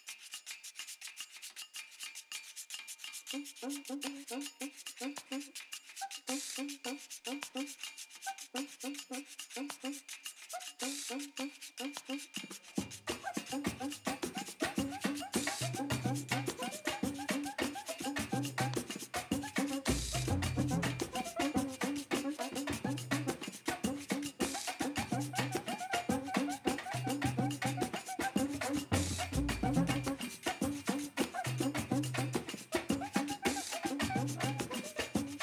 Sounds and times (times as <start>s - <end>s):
Music: 0.1s - 35.4s.